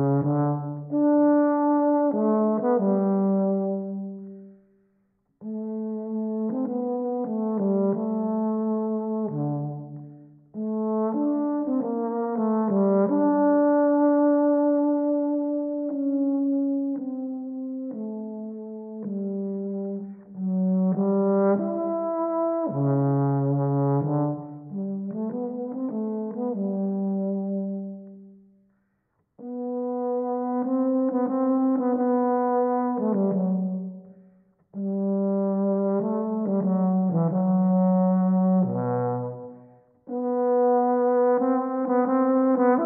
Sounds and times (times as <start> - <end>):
Brass instrument: 0.0 - 42.8.